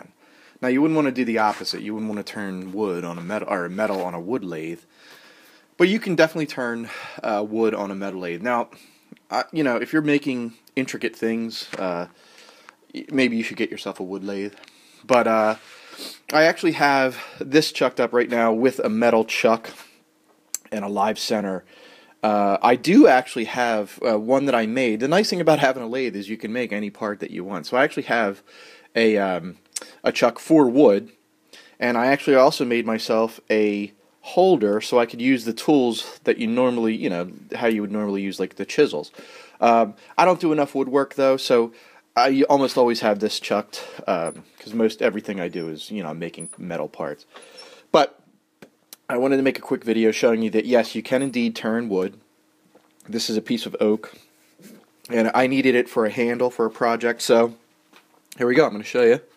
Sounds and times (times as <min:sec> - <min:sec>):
Speech: 0:00.0 - 0:04.9, 0:05.8 - 0:12.2, 0:12.9 - 0:15.6, 0:16.3 - 0:19.9, 0:20.6 - 0:31.2, 0:31.8 - 0:47.3, 0:47.9 - 0:48.2, 0:49.0 - 0:52.2, 0:53.0 - 0:57.6, 0:58.4 - 0:59.3.